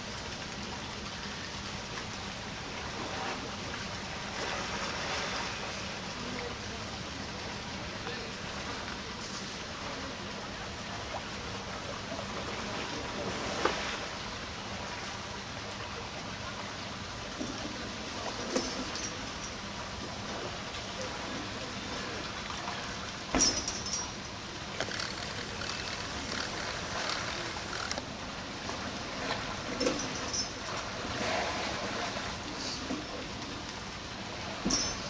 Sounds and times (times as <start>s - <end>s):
Stream: 0.0s - 35.0s
Speech: 6.1s - 11.0s, 20.8s - 22.9s.